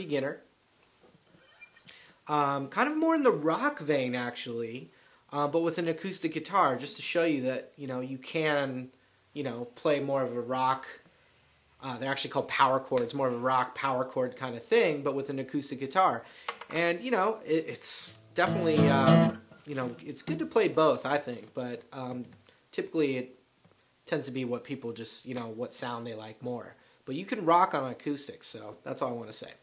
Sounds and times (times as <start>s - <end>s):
Speech: 0.0s - 0.5s, 2.3s - 11.0s, 11.8s - 23.4s, 24.0s - 29.6s
Strum: 18.1s - 19.7s
Acoustic guitar: 18.1s - 20.6s.